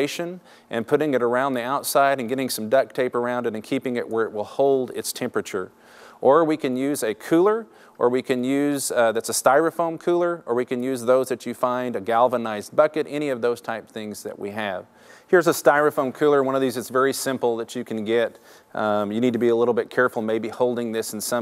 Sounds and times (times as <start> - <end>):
Speech: 0.0 - 21.4.